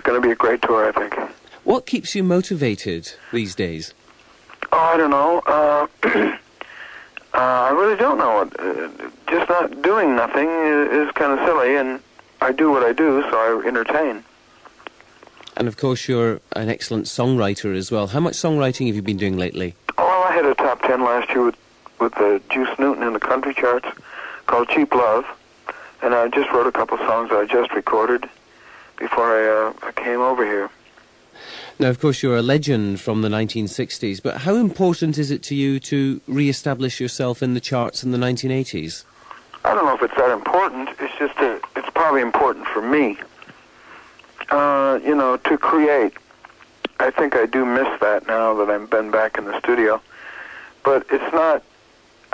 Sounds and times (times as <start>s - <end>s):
Speech: 0.0s - 4.0s, 4.6s - 6.5s, 7.2s - 14.3s, 15.4s - 28.4s, 29.0s - 30.8s, 31.7s - 43.4s, 44.4s - 46.2s, 46.9s - 50.1s, 50.8s - 51.7s.